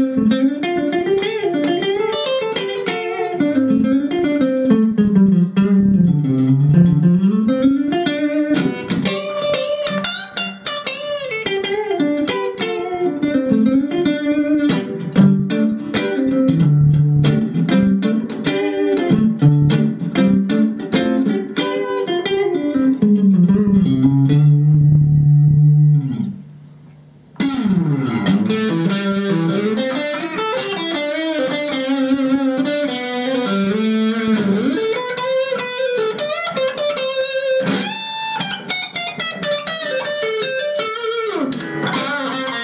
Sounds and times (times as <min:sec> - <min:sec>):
Bass guitar: 0:03.3 - 0:10.8, 0:11.5 - 0:26.8, 0:27.4 - 0:38.2, 0:41.4 - 0:42.6.